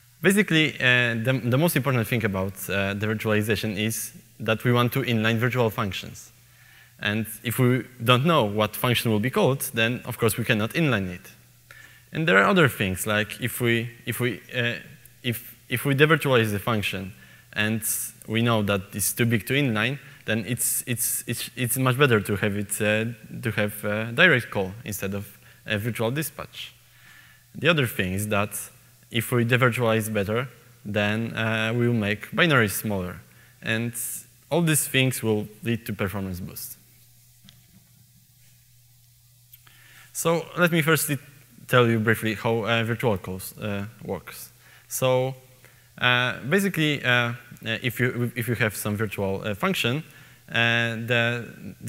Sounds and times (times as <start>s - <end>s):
Speech: 0.2s - 6.4s, 7.0s - 11.4s, 12.1s - 26.8s, 27.6s - 36.8s, 40.2s - 45.4s, 46.0s - 51.8s.